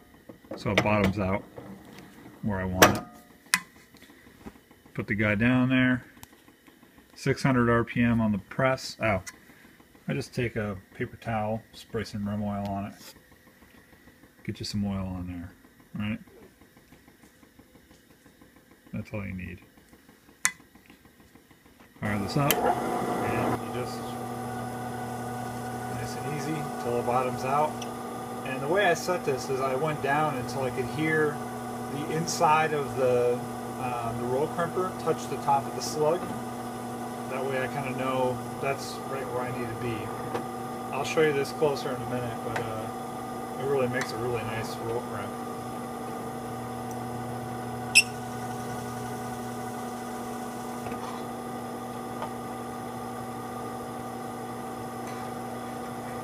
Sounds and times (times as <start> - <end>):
Speech: 0.6 - 1.4, 2.4 - 3.0, 5.0 - 6.1, 7.2 - 9.3, 10.1 - 13.1, 14.4 - 16.3, 18.9 - 19.6, 22.0 - 24.2, 25.9 - 27.8, 28.4 - 36.4, 37.3 - 40.2, 40.9 - 43.0, 43.6 - 45.4.